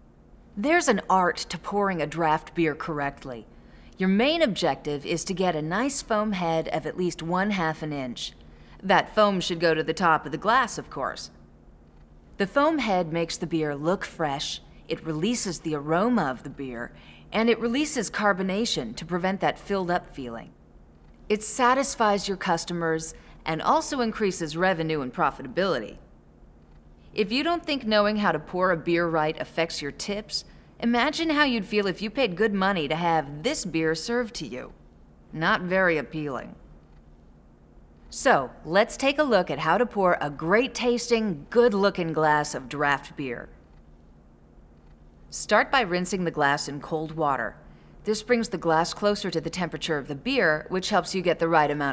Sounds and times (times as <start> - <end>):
Speech: 0.6 - 11.4, 12.4 - 20.6, 21.3 - 26.1, 27.2 - 36.6, 38.1 - 43.6, 45.3 - 51.9.